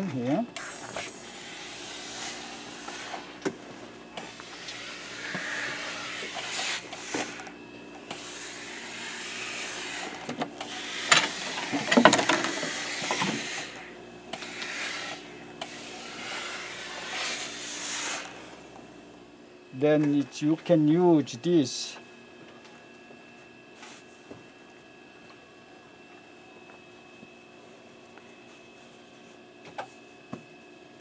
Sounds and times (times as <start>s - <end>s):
Speech: 0.0s - 0.5s, 19.8s - 22.0s.